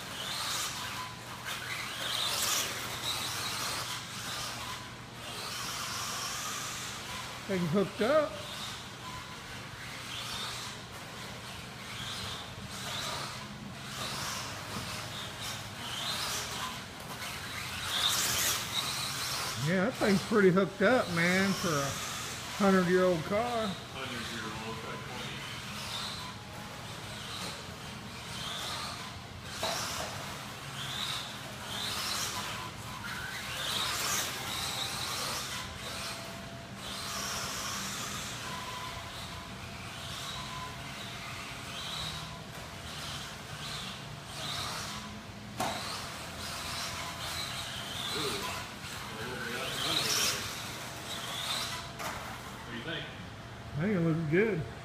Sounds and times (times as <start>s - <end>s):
Car: 0.0s - 19.6s, 24.8s - 52.6s.